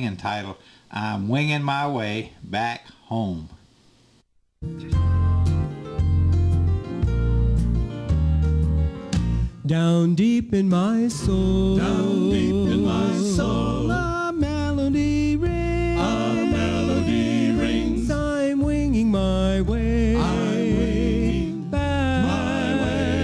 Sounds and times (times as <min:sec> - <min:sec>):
Gospel music: 0:04.6 - 0:23.2.